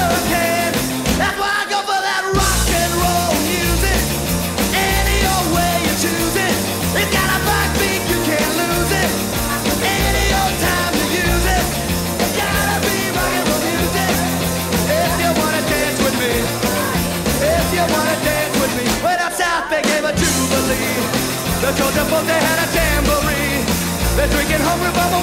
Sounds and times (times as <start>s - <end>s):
Punk rock: 0.0s - 25.2s.